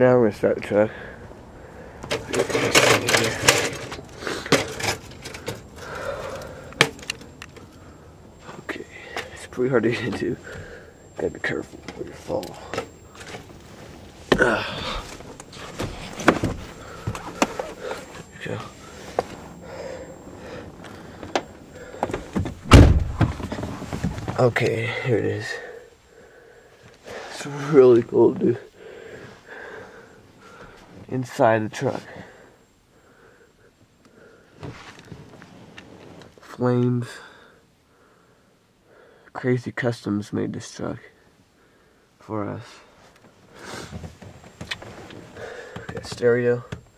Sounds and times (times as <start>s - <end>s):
Speech: 0.0s - 1.0s, 8.7s - 10.4s, 24.4s - 25.8s, 27.3s - 28.7s, 31.1s - 32.1s, 39.4s - 41.2s, 42.2s - 42.9s, 45.9s - 46.8s.